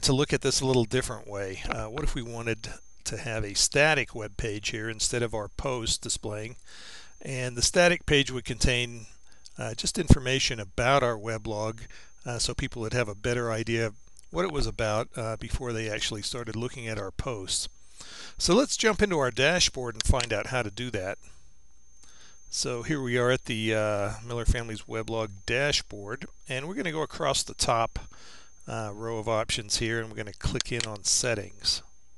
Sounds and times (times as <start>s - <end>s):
Speech: 0.0s - 6.6s, 7.2s - 17.7s, 18.4s - 21.2s, 22.5s - 28.1s, 28.7s - 31.9s.